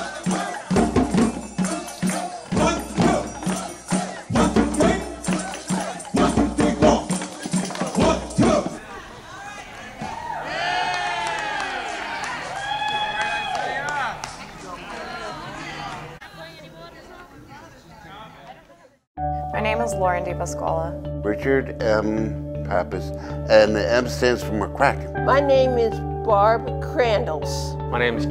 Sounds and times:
Music: 0:00.0 - 0:08.8, 0:19.2 - 0:28.3.

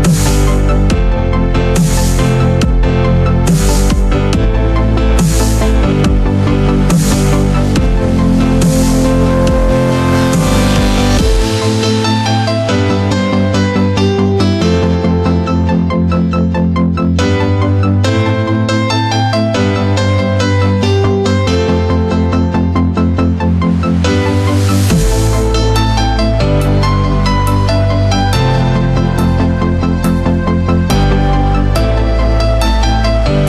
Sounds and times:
Music: 0:00.0 - 0:33.4.

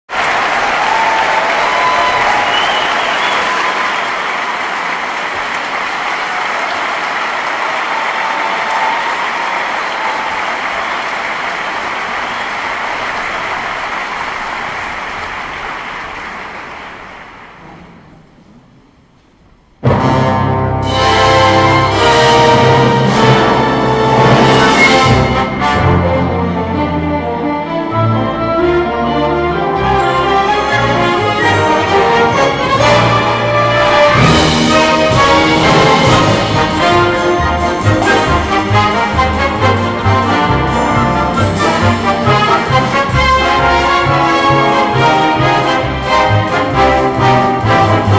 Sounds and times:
Applause: 0:00.0 - 0:18.0, 0:33.7 - 0:36.2.

